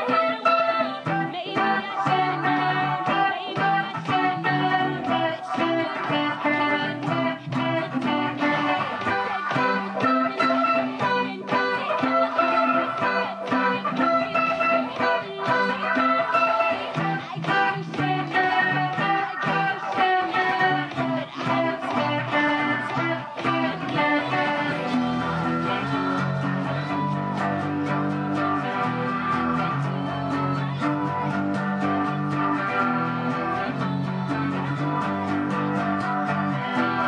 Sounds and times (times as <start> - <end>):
Electric guitar: 0.0 - 37.0
Strum: 0.0 - 37.0.